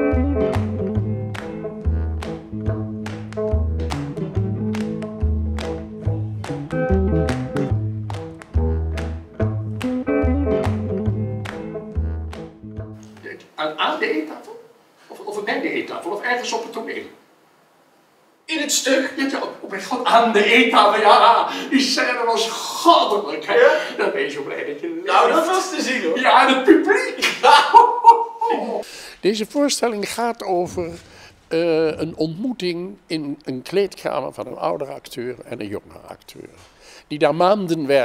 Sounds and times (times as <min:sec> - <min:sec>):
Speech: 0:13.2 - 0:17.2, 0:18.5 - 0:27.2, 0:28.5 - 0:38.0.